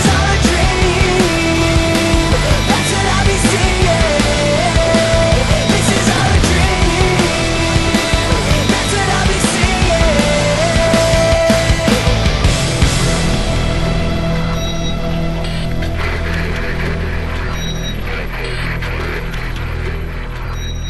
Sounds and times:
Angry music: 0.0s - 20.8s.

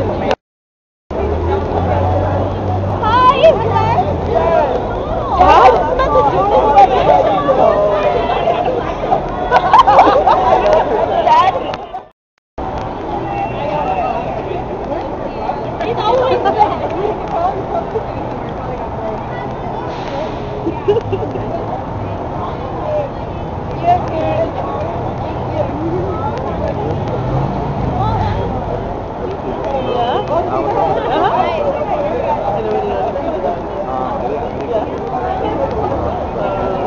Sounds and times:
Inside, public space: 0.0s - 0.4s, 1.1s - 36.8s.

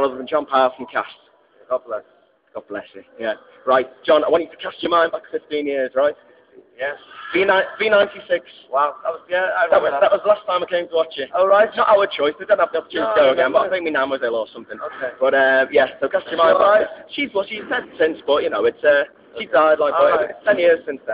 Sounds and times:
Speech: 0.0s - 2.0s, 2.6s - 21.1s.

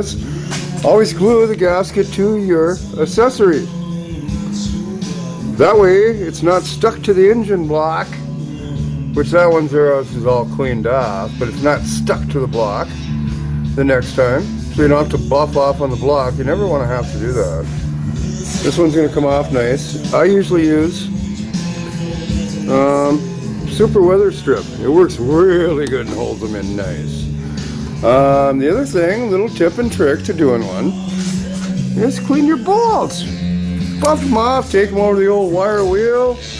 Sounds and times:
Speech: 0.0s - 0.2s, 0.8s - 3.7s, 5.6s - 8.2s, 9.2s - 12.9s, 13.8s - 17.7s, 18.6s - 21.1s, 22.7s - 27.2s, 28.0s - 31.0s, 32.0s - 33.3s, 34.0s - 36.5s
Music: 0.0s - 36.5s.

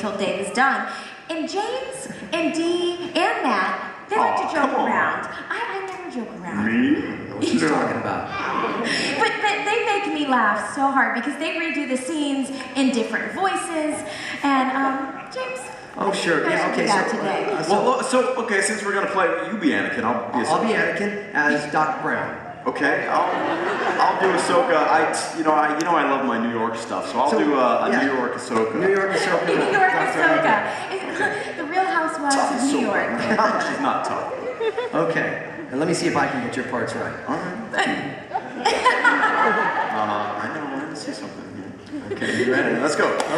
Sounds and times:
Male speech, man speaking: 6.5s - 8.8s, 16.0s - 30.7s, 32.3s - 38.2s, 39.9s - 43.3s.

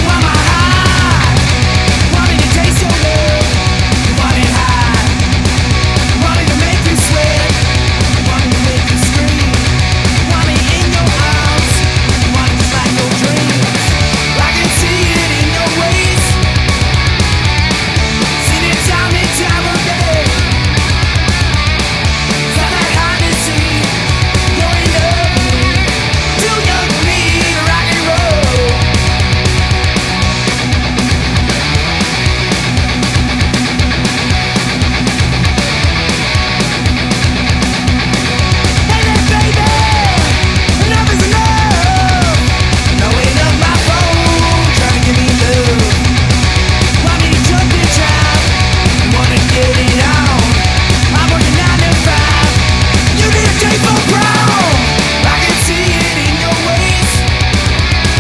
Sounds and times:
Grunge: 0.0s - 58.2s
Heavy metal: 0.0s - 58.2s
Punk rock: 0.0s - 58.2s
Rock and roll: 0.0s - 58.2s.

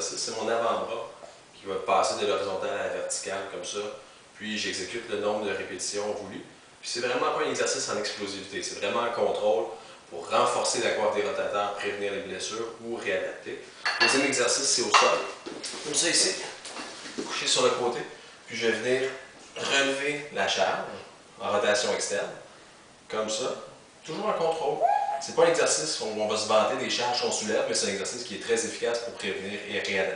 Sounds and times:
Speech: 0.0s - 16.6s, 17.2s - 22.4s, 23.1s - 30.1s.

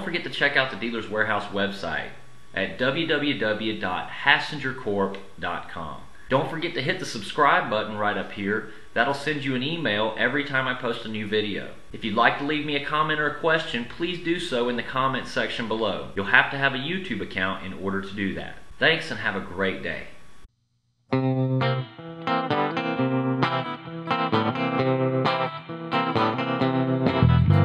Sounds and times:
Speech: 0.0s - 20.2s
Inside, small room: 0.0s - 27.6s
Music: 21.1s - 27.6s.

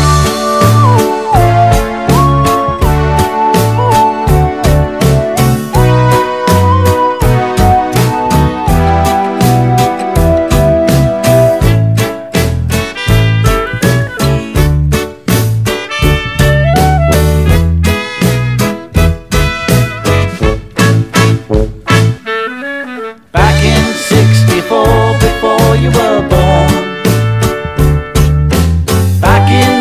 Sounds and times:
Saxophone: 0.0s - 12.2s, 12.8s - 14.8s, 15.8s - 25.7s, 26.4s - 28.6s.

